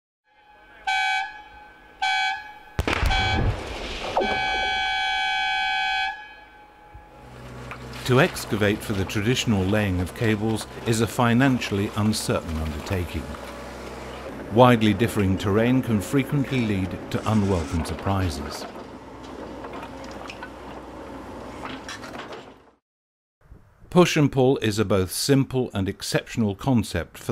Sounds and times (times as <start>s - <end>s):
Air horn, truck horn: 0.3s - 3.5s, 4.2s - 7.3s
Speech: 8.0s - 13.4s, 14.5s - 18.7s, 23.9s - 27.3s.